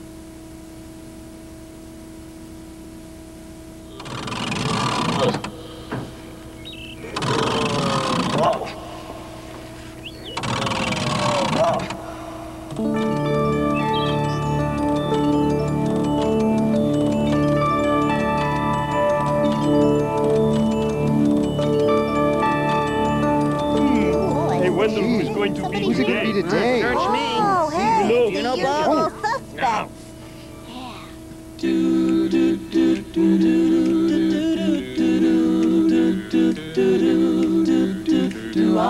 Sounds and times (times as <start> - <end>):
Music: 12.8 - 28.7, 31.6 - 38.9
Speech: 23.9 - 30.0.